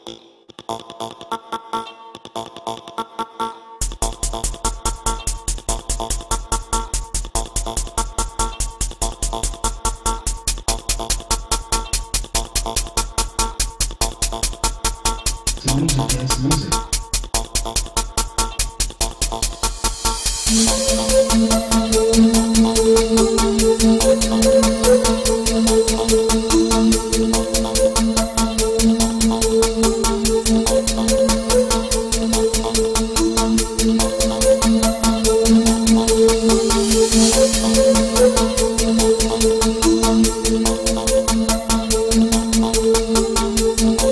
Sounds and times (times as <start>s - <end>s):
Dance music: 15.6s - 16.8s, 20.4s - 44.1s.